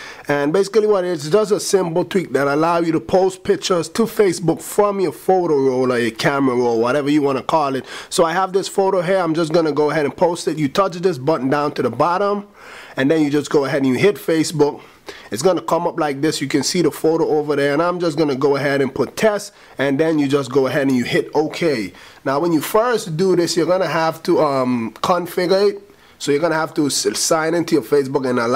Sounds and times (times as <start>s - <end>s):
Speech: 0.3s - 28.5s.